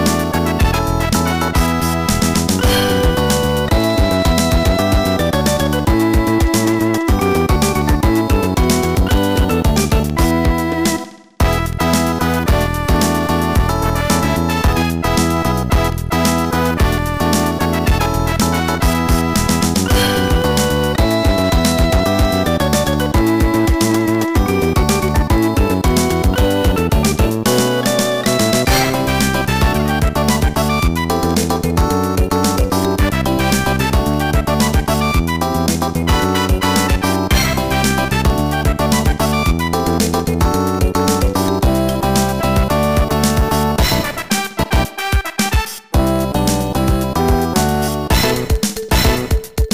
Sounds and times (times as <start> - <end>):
Music: 0.0 - 49.7.